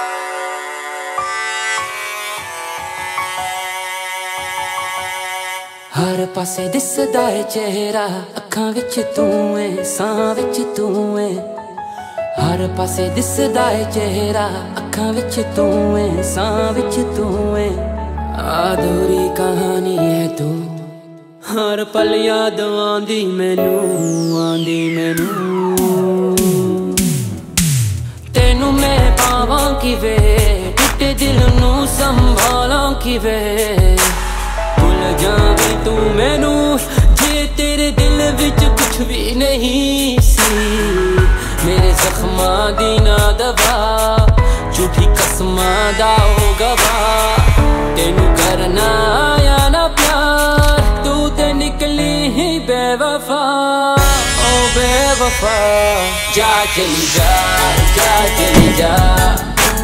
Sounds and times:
Music: 0.0s - 59.8s.

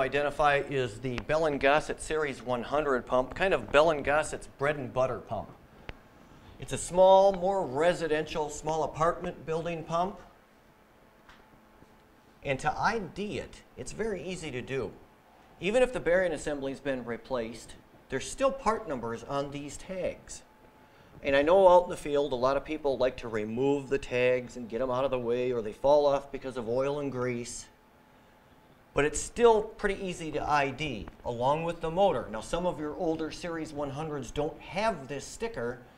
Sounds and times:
Speech: 0.0s - 5.6s, 6.6s - 10.4s, 12.4s - 15.0s, 15.6s - 20.5s, 21.2s - 27.8s, 29.0s - 35.9s.

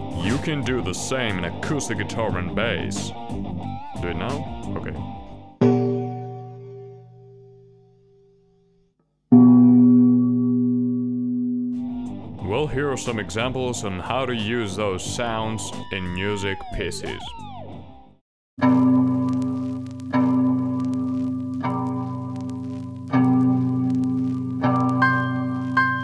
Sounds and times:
Bass guitar: 0.0s - 5.9s, 11.8s - 18.2s
Speech: 0.2s - 3.2s, 4.0s - 5.1s, 12.4s - 17.3s.

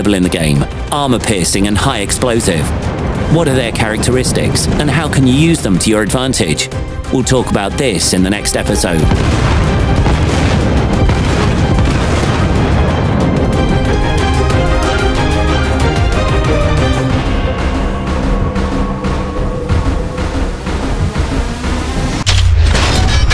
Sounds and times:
Speech: 0.0s - 2.7s, 3.3s - 9.1s
Music: 0.0s - 23.3s.

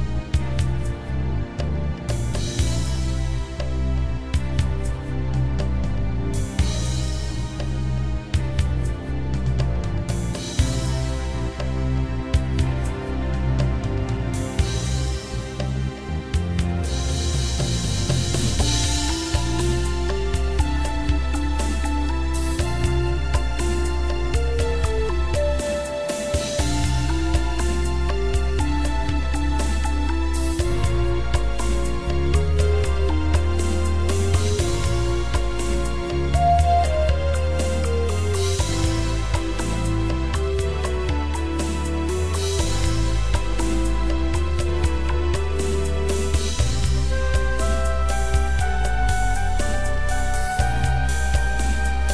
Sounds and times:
Music: 0.0s - 52.1s.

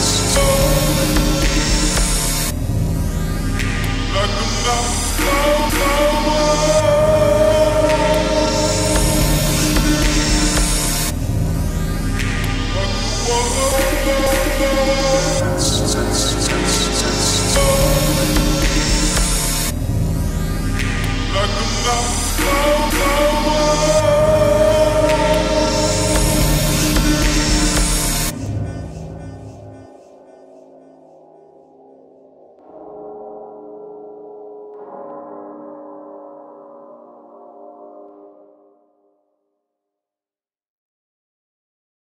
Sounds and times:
Music: 0.0s - 40.2s.

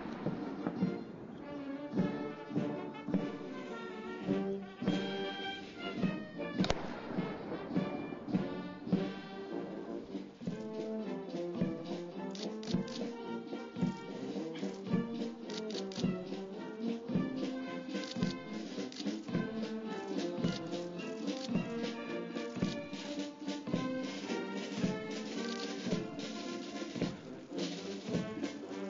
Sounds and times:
Music: 0.0s - 28.9s.

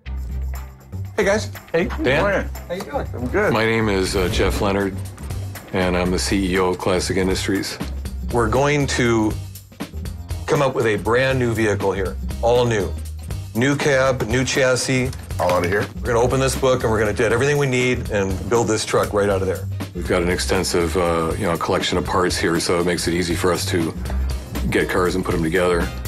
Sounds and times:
Music: 0.0s - 26.0s
Speech: 1.2s - 5.0s, 5.8s - 9.4s, 10.5s - 13.0s, 13.6s - 24.0s, 24.6s - 26.0s.

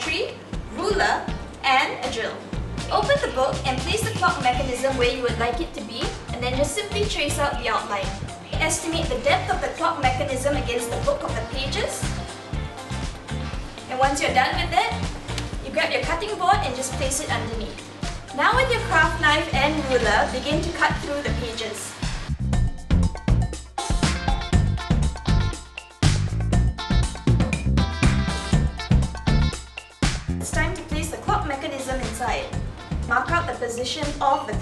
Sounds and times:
Speech: 0.0s - 12.1s, 13.9s - 15.0s, 15.6s - 17.8s, 18.4s - 22.0s, 30.4s - 34.6s
Music: 0.0s - 34.6s.

